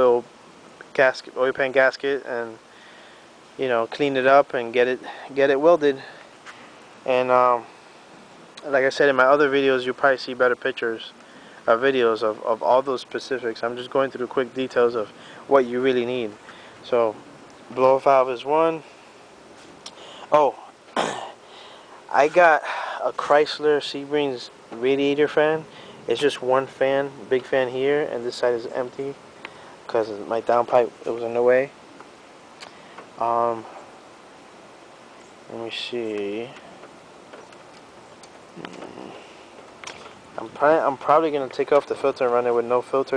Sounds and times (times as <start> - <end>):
Speech: 0.0 - 0.3, 0.9 - 2.6, 3.6 - 6.2, 7.1 - 7.7, 8.6 - 11.1, 11.7 - 18.9, 20.3 - 20.6, 22.1 - 29.2, 29.9 - 31.8, 33.2 - 33.7, 35.5 - 36.6, 40.4 - 43.1.